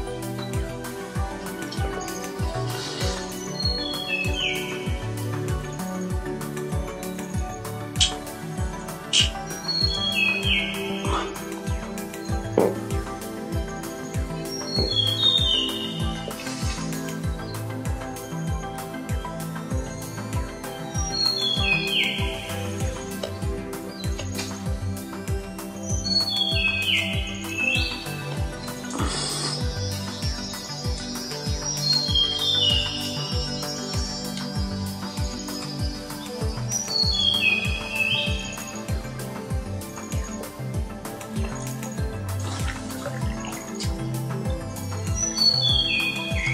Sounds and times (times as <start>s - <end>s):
Music: 0.0s - 46.5s.